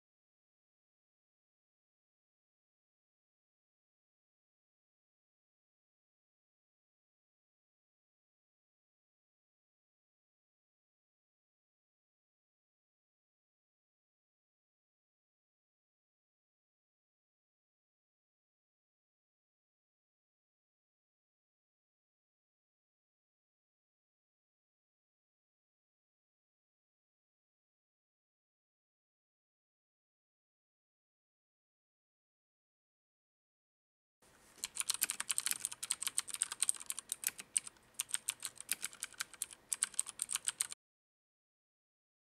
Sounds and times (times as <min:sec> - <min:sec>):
Computer keyboard: 0:34.6 - 0:40.8.